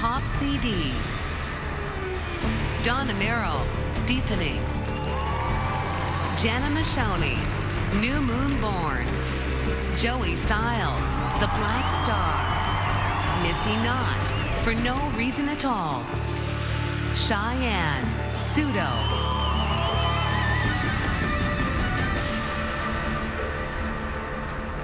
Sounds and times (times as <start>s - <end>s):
Speech: 0.0s - 1.1s, 2.8s - 4.7s, 6.4s - 9.1s, 10.0s - 12.3s, 13.4s - 16.1s, 17.2s - 19.0s
Background music: 0.0s - 24.8s
Exciting music: 0.0s - 24.8s.